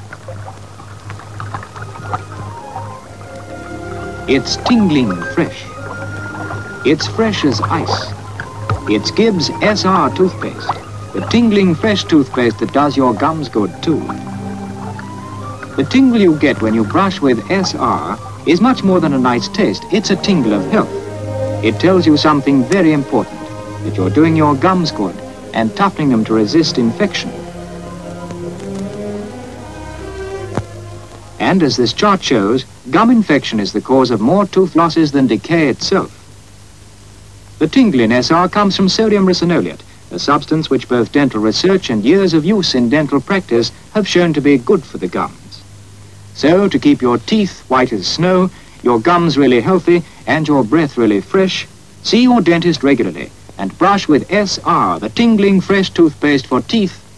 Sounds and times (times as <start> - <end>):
Music: 0.4 - 32.8
Speech: 4.3 - 5.7, 6.9 - 8.2, 8.9 - 14.2, 15.8 - 20.9, 21.6 - 27.4, 31.4 - 36.1, 37.6 - 45.6, 46.4 - 57.0.